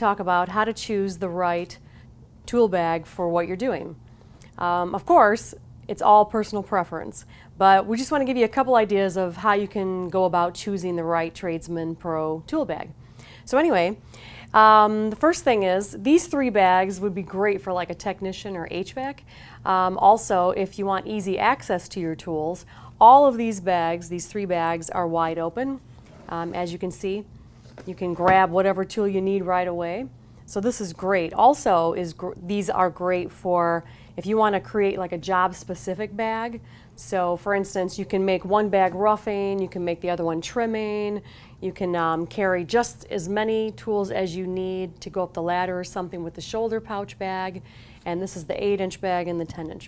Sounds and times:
Speech: 0.0s - 1.8s, 2.5s - 4.0s, 4.6s - 14.0s, 14.6s - 49.8s.

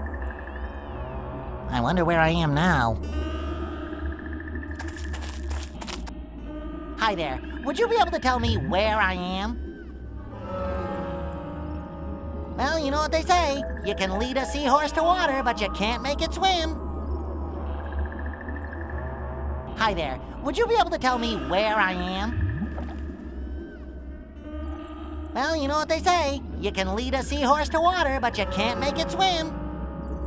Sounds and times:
Speech: 1.7s - 3.0s, 7.0s - 9.6s, 12.6s - 16.8s, 19.8s - 22.4s, 25.4s - 29.5s.

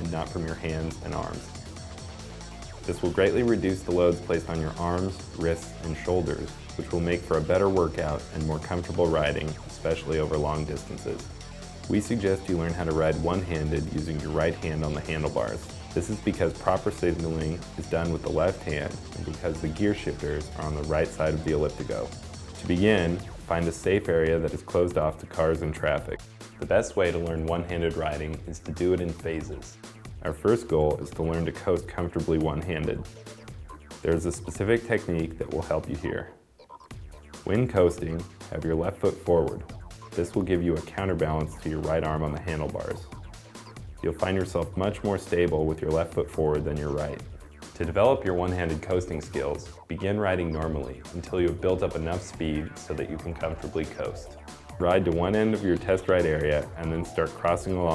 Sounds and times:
Speech: 0.0s - 1.6s, 2.9s - 11.3s, 11.9s - 33.1s, 34.0s - 36.4s, 37.4s - 43.1s, 44.0s - 57.9s
Music: 0.0s - 57.9s.

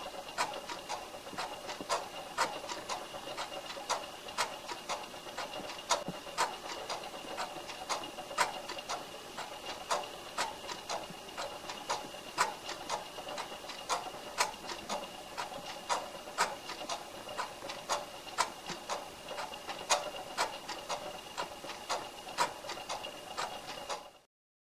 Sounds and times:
Tick-tock: 0.0s - 24.2s.

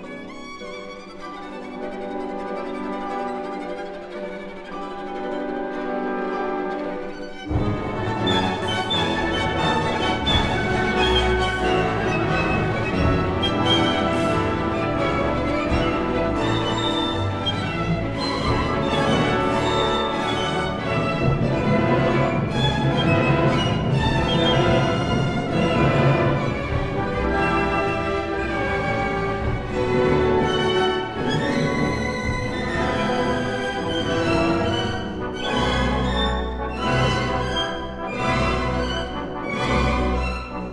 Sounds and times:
Violin, fiddle: 0.0s - 40.7s.

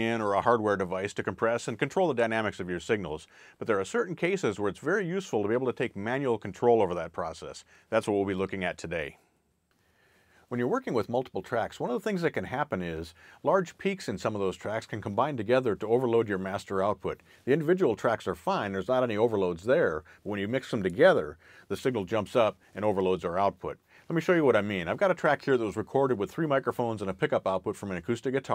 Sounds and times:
Speech: 0.0s - 9.2s, 10.5s - 28.5s.

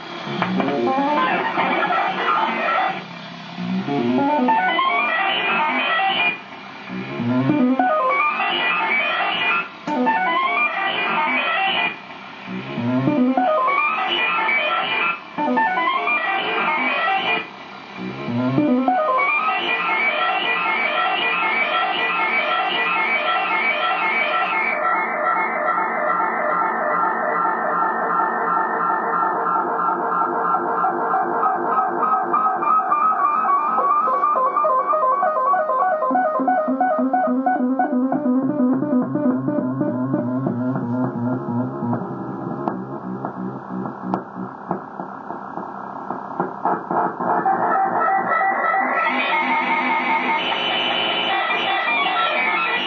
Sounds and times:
Music: 0.0s - 45.2s, 46.4s - 52.8s.

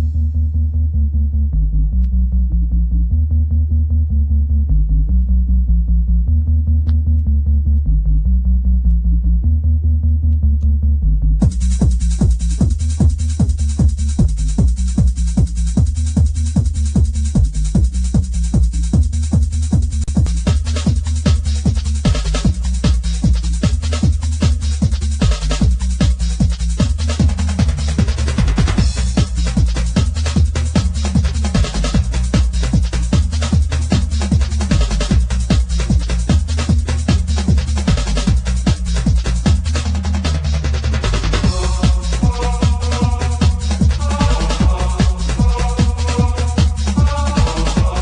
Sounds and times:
Music: 0.0s - 48.0s.

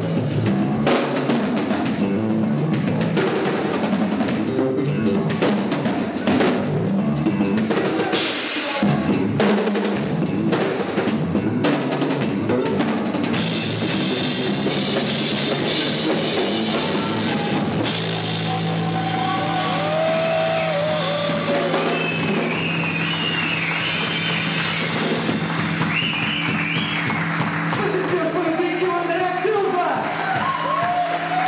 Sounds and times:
Drum: 0.0s - 31.4s
Drum kit: 0.0s - 31.4s
Guitar: 0.0s - 31.4s
Rock music: 0.0s - 31.4s.

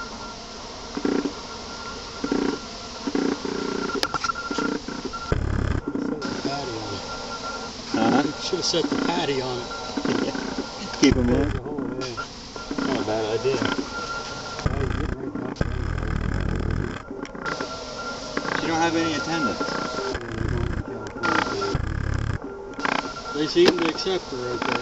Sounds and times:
Bee, wasp, etc.: 0.0s - 24.8s
Fly, housefly: 0.0s - 24.8s.

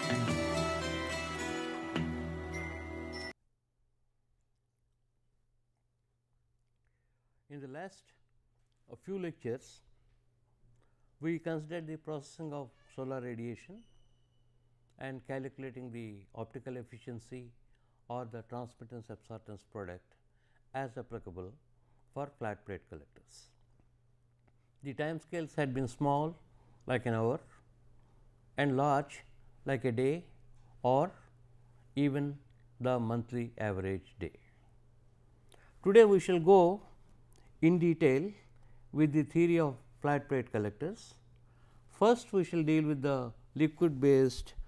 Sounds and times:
Speech: 7.5s - 8.2s, 8.9s - 9.9s, 11.2s - 13.8s, 15.0s - 23.6s, 24.8s - 27.6s, 28.6s - 31.2s, 32.0s - 34.5s, 35.8s - 36.9s, 37.6s - 41.2s, 41.9s - 44.6s.

